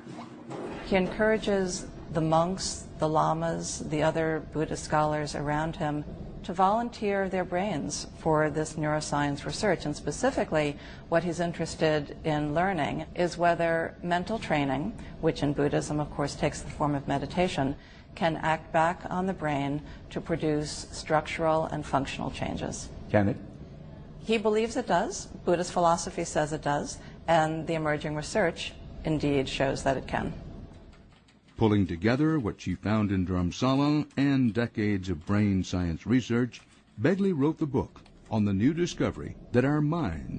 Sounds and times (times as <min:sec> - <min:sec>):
Speech: 0:00.9 - 0:23.4, 0:31.6 - 0:40.3.